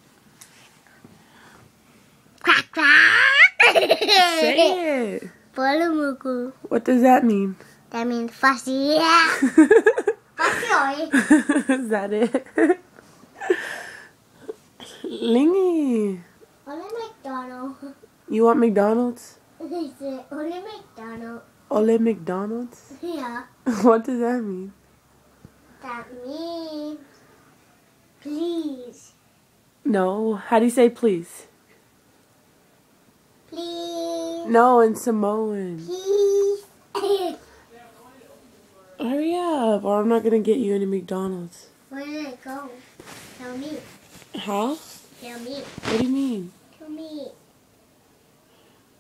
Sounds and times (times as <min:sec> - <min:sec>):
Child speech, kid speaking: 0:02.5 - 0:03.4, 0:05.5 - 0:06.7, 0:07.9 - 0:09.4, 0:10.4 - 0:11.2, 0:16.6 - 0:18.1, 0:19.6 - 0:21.5, 0:22.8 - 0:23.6, 0:25.8 - 0:27.1, 0:28.2 - 0:29.2, 0:33.5 - 0:34.6, 0:35.8 - 0:37.4, 0:41.5 - 0:43.9, 0:44.5 - 0:47.4
Baby laughter: 0:03.1 - 0:04.6
Giggle: 0:03.4 - 0:04.8, 0:09.3 - 0:13.8.